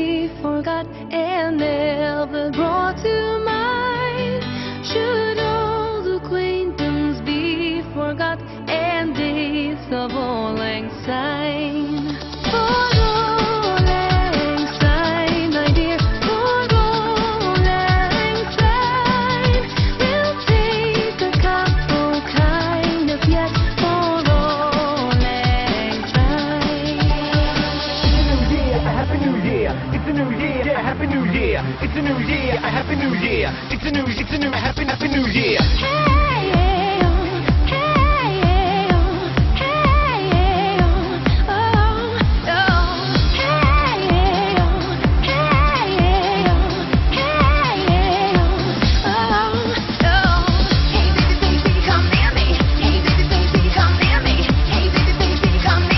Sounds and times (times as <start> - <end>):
Techno: 10.6 - 55.9.